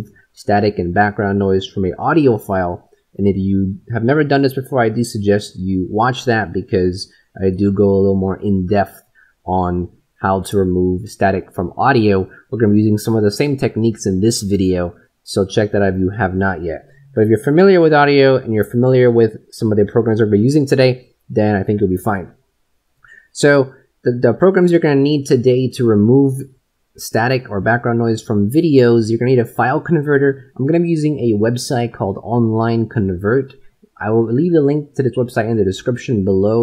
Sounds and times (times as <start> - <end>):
Speech: 0.0 - 22.4, 23.1 - 36.6.